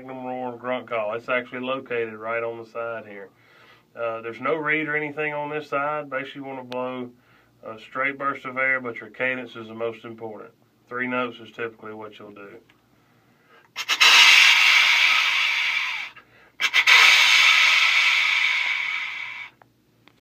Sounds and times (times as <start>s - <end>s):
Speech: 0.0s - 3.3s, 4.0s - 12.7s
Wheeze: 13.0s - 19.6s.